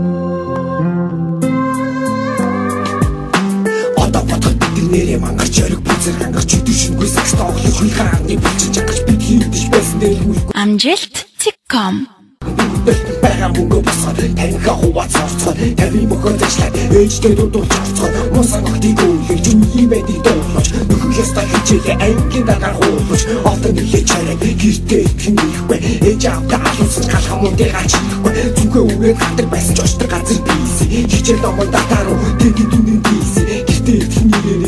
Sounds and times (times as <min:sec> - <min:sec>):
Music: 0:00.0 - 0:10.6, 0:12.4 - 0:34.6.